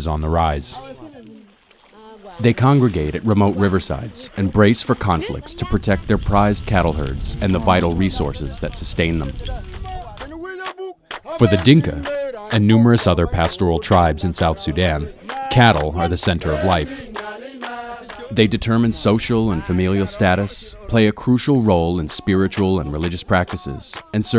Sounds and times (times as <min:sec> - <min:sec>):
Speech: 0:00.0 - 0:09.6, 0:11.3 - 0:17.1, 0:18.3 - 0:24.3.